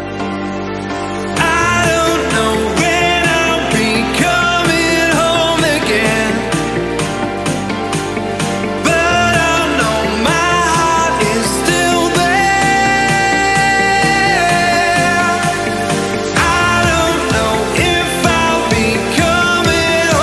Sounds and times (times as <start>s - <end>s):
Music: 0.0s - 20.2s.